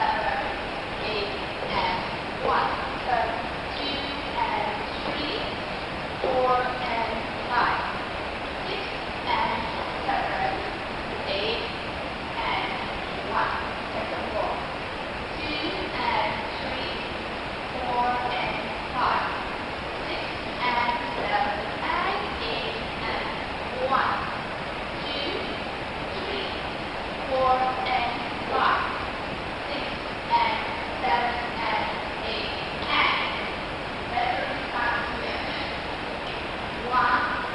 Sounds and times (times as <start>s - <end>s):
Speech: 0.0s - 5.6s, 6.2s - 11.8s, 12.4s - 14.6s, 15.3s - 17.1s, 17.7s - 19.4s, 20.0s - 24.4s, 25.0s - 26.6s, 27.3s - 29.0s, 29.7s - 33.5s, 34.1s - 37.5s.